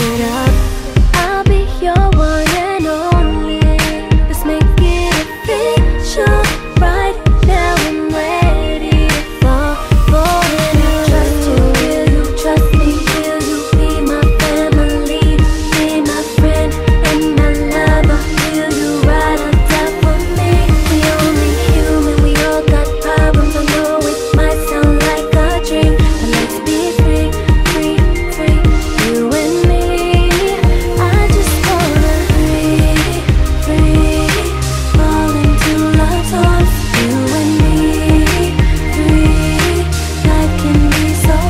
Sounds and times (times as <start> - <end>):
Music: 0.0 - 41.5.